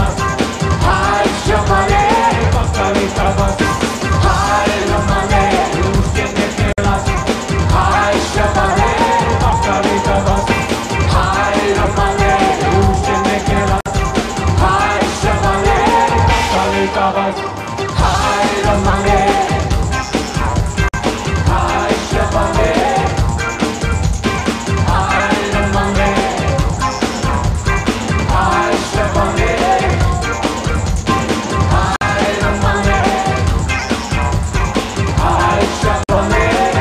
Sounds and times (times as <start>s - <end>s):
Music: 0.0s - 36.8s.